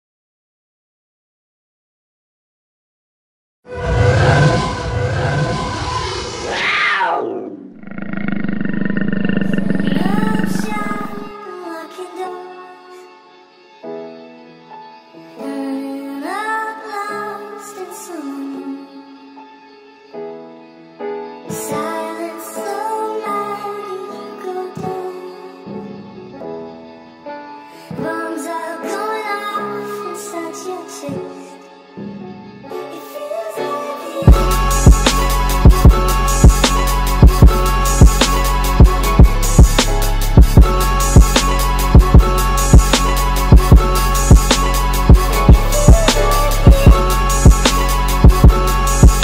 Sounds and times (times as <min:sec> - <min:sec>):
Music: 0:03.6 - 0:07.4, 0:09.0 - 0:49.2.